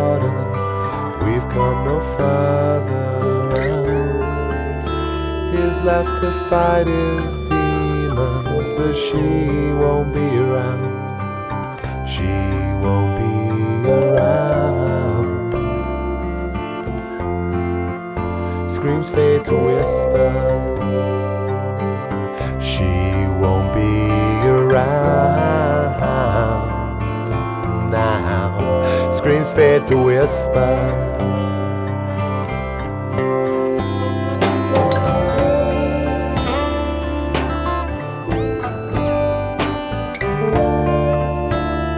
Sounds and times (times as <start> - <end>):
Music: 0.0 - 41.9.